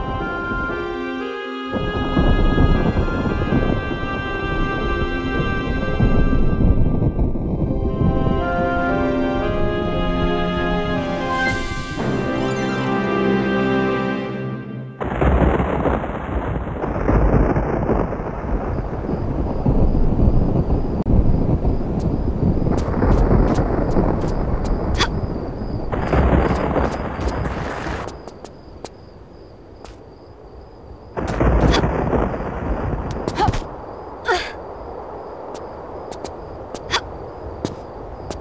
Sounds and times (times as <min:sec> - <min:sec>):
Music: 0:00.0 - 0:15.1.